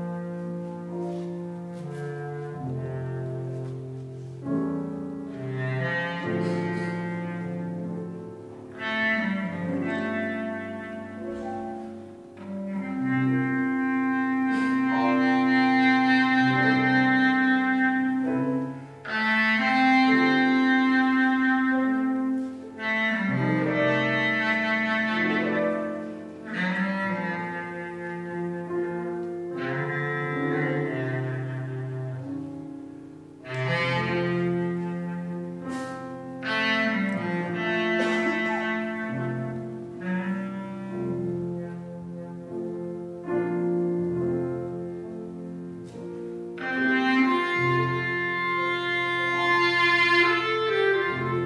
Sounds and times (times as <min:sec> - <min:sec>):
Jazz: 0:00.0 - 0:51.4
Musical instrument: 0:00.0 - 0:51.4.